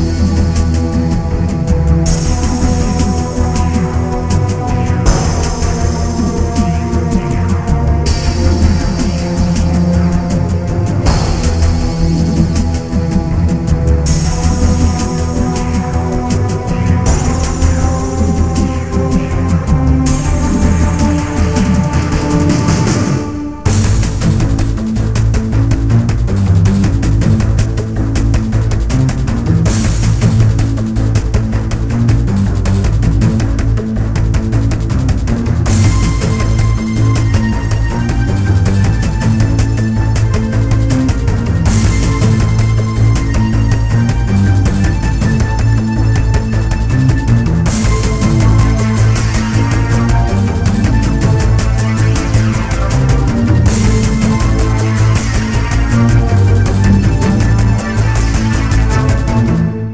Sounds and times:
Music: 0.0 - 59.9.

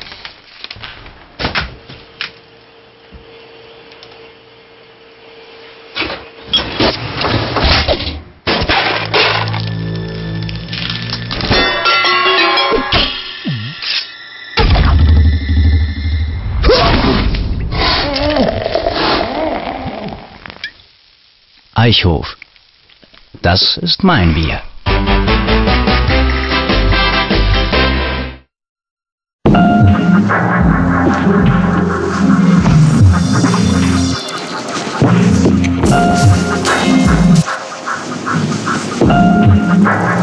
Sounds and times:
Music: 8.9 - 15.2, 24.9 - 28.5, 29.5 - 40.2.

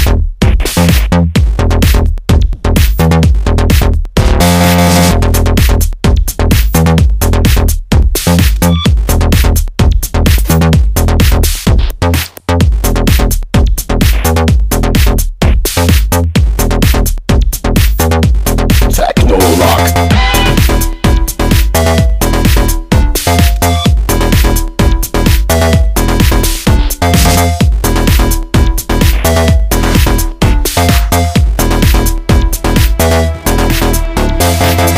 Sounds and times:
Techno: 0.0 - 34.9.

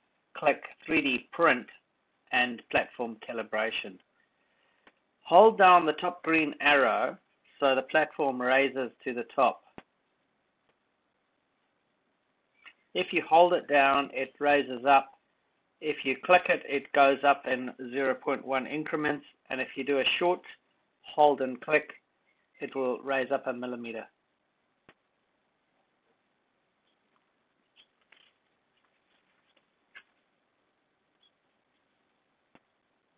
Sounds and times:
Speech: 0.4 - 1.7, 2.3 - 4.0, 5.3 - 9.6, 13.0 - 15.1, 15.8 - 22.0, 22.6 - 24.2.

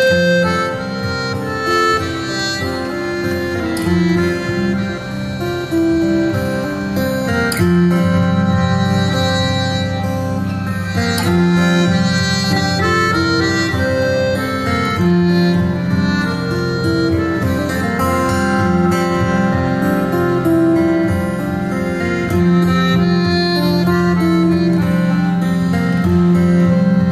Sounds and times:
Music: 0.0 - 27.1.

